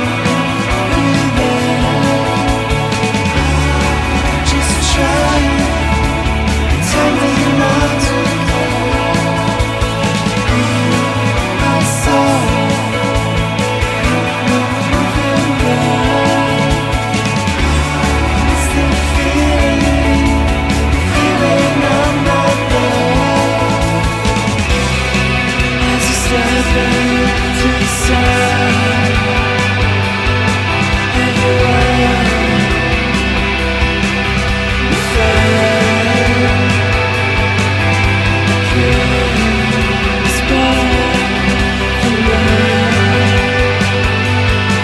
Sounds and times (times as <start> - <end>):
Music: 0.0 - 44.8.